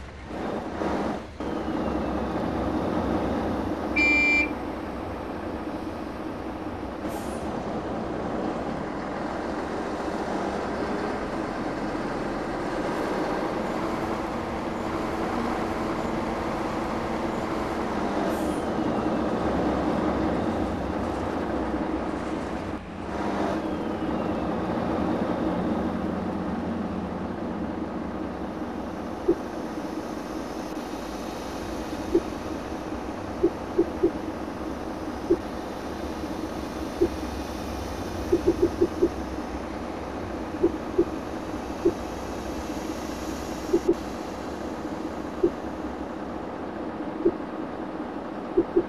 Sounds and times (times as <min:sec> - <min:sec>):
Bus: 0:00.0 - 0:48.8.